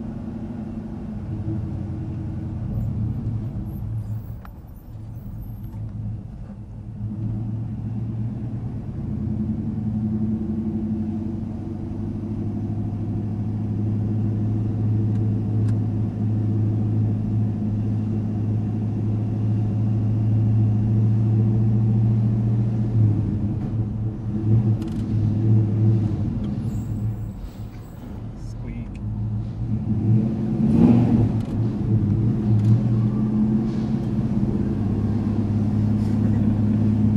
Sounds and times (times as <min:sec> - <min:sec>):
Outside, urban or manmade: 0:00.0 - 0:37.1
Vehicle: 0:00.0 - 0:37.1.